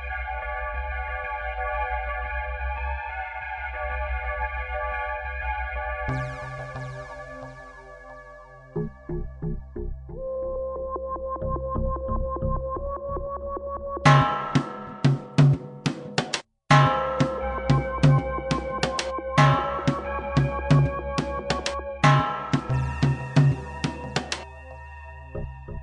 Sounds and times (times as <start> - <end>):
Music: 0.0 - 25.8.